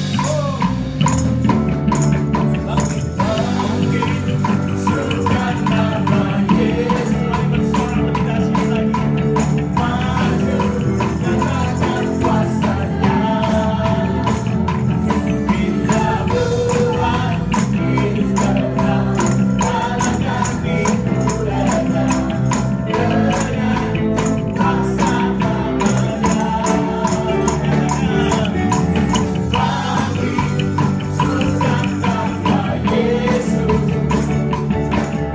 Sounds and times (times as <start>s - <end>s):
Rock and roll: 0.0s - 35.3s.